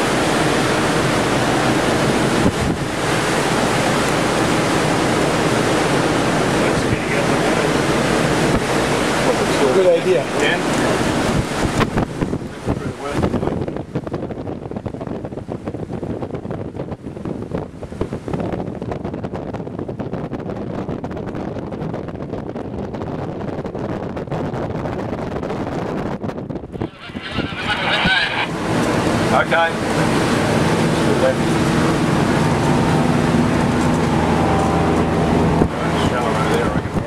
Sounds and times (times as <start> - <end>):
Ocean: 0.0 - 37.0
Speech: 6.6 - 7.7, 9.2 - 10.7, 12.5 - 13.6, 26.8 - 28.5, 29.3 - 29.8, 31.0 - 31.4, 35.7 - 37.0.